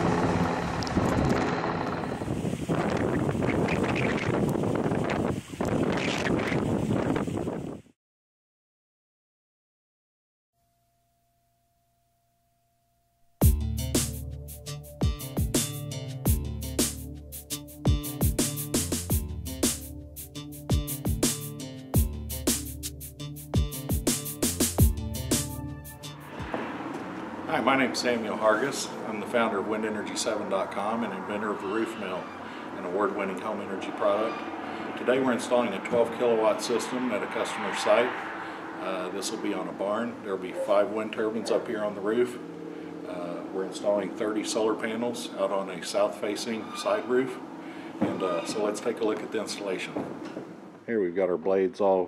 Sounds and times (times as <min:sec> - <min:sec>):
Music: 0:13.4 - 0:26.6
Speech: 0:27.5 - 0:34.4, 0:35.0 - 0:38.2, 0:38.8 - 0:42.4, 0:43.1 - 0:47.4, 0:48.0 - 0:50.0, 0:50.9 - 0:52.0.